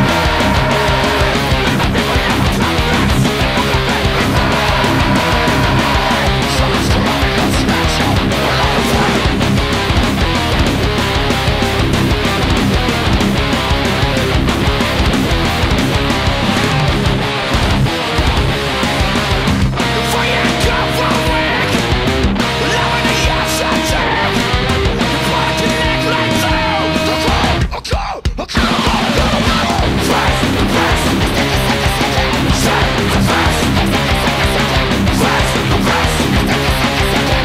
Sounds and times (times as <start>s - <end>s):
Bass guitar: 0.0s - 27.8s, 28.6s - 37.4s
Electric guitar: 0.0s - 27.8s, 28.6s - 37.4s.